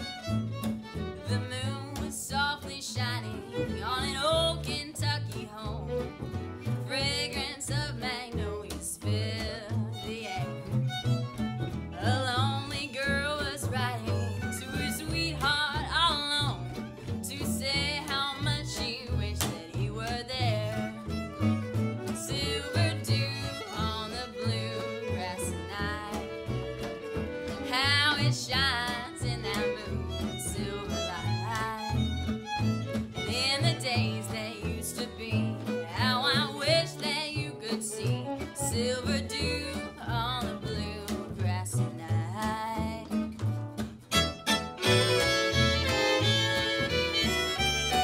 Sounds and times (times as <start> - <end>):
Bluegrass: 0.0 - 48.0.